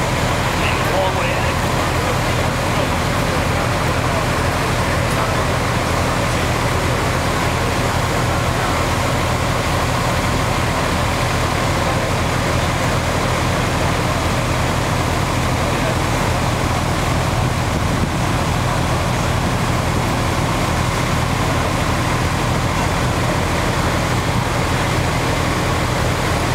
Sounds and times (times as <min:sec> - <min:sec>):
Traffic noise, roadway noise: 0:00.0 - 0:26.5.